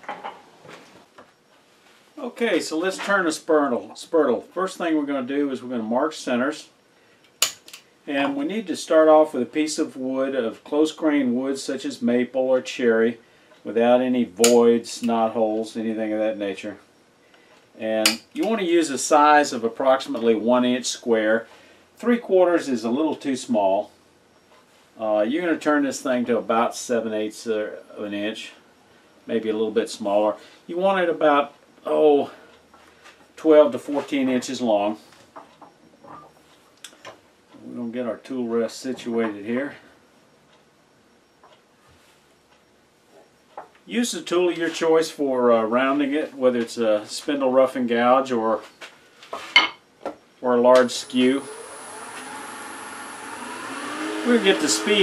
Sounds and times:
Speech: 2.2s - 6.8s, 8.1s - 16.9s, 17.8s - 23.9s, 25.0s - 28.6s, 29.3s - 32.5s, 33.4s - 35.0s, 37.6s - 39.9s, 43.9s - 48.7s, 50.4s - 51.5s, 54.2s - 55.0s
Tools: 7.4s - 7.8s.

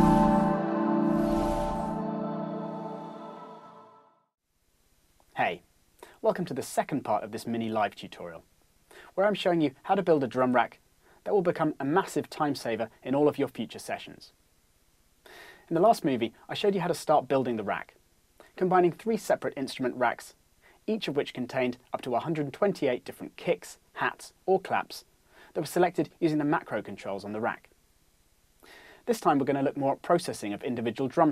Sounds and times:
Speech: 5.3s - 14.4s, 15.7s - 27.7s, 29.1s - 31.3s.

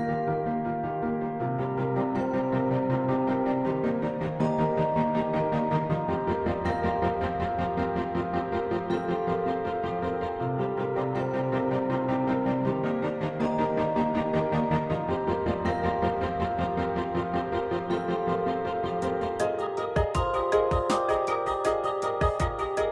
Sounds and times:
Music: 0.0s - 22.9s.

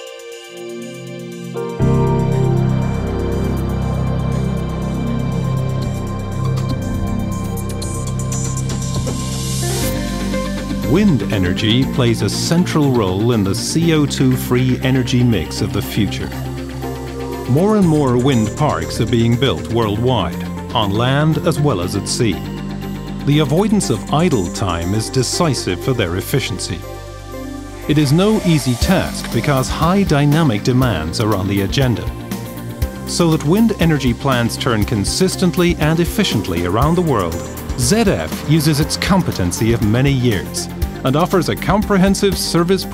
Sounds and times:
Music: 0.0s - 42.9s
Speech: 10.9s - 16.4s, 17.5s - 22.5s, 23.3s - 26.9s, 27.9s - 32.2s, 33.1s - 42.9s.

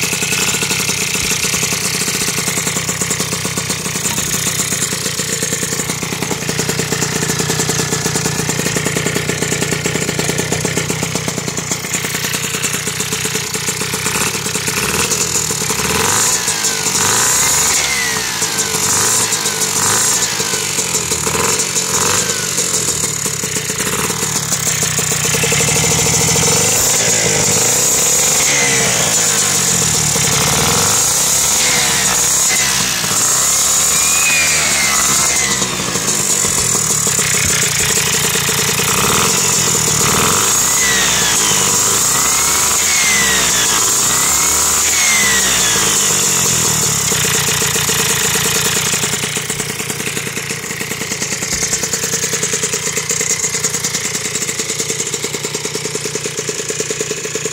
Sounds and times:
Motorcycle: 0.0s - 57.5s.

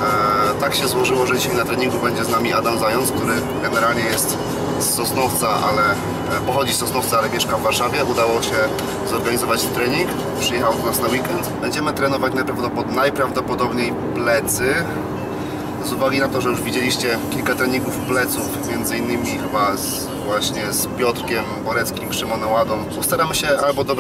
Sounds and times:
Music: 0.0s - 12.6s, 13.5s - 24.0s
Speech: 0.0s - 15.0s, 15.8s - 24.0s.

